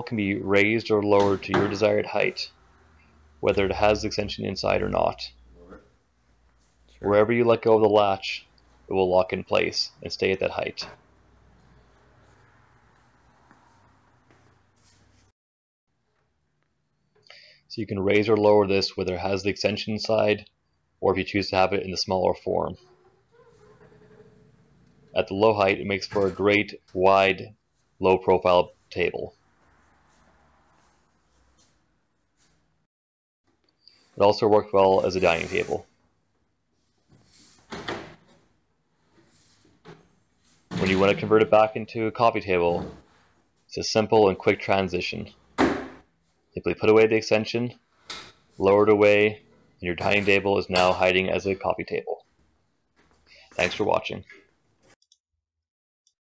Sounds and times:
Speech: 0:00.0 - 0:02.6, 0:03.4 - 0:05.9, 0:07.0 - 0:11.0, 0:17.7 - 0:22.8, 0:25.1 - 0:29.4, 0:34.2 - 0:35.9, 0:40.7 - 0:43.0, 0:43.7 - 0:45.4, 0:46.6 - 0:47.8, 0:48.6 - 0:52.2, 0:53.5 - 0:54.4.

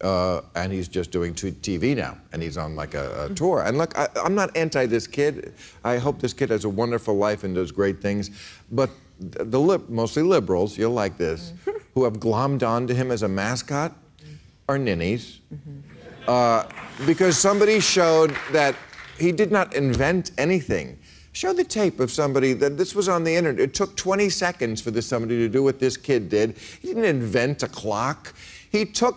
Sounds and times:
Speech: 0:16.3 - 0:29.1.

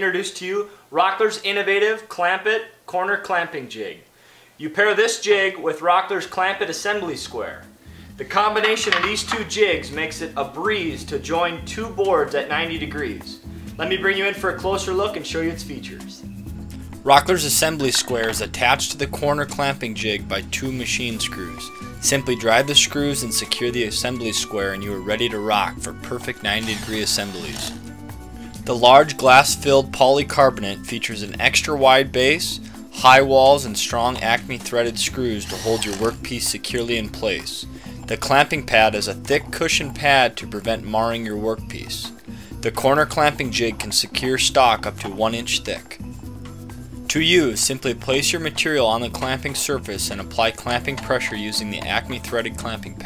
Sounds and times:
Speech: 0:00.0 - 0:04.0, 0:04.6 - 0:16.2, 0:17.0 - 0:27.8, 0:28.6 - 0:46.0, 0:47.1 - 0:53.0
Music: 0:06.8 - 0:53.0.

